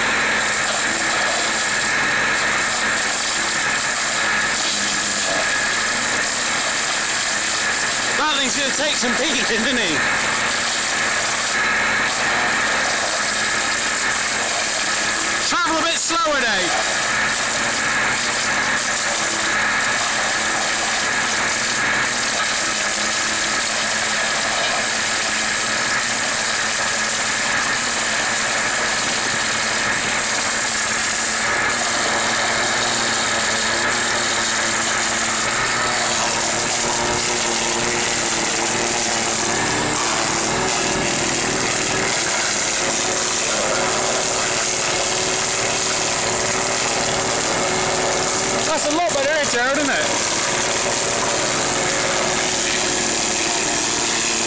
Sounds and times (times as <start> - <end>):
Speech: 8.2 - 10.1, 15.4 - 16.8, 48.7 - 50.1.